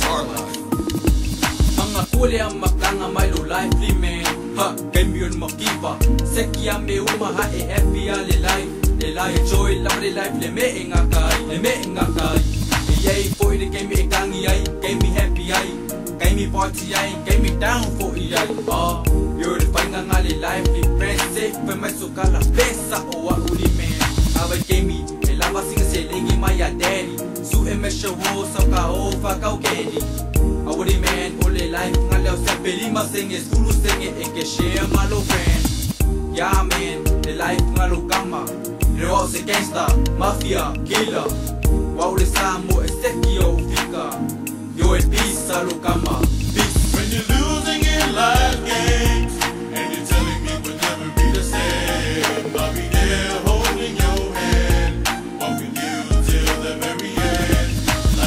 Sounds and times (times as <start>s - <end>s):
Hip hop music: 0.0s - 58.2s.